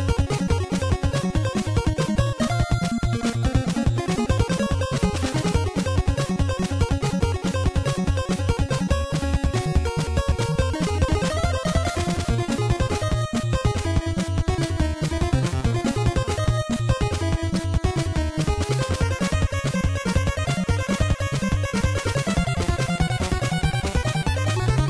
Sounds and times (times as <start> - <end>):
Music: 0.0 - 24.8.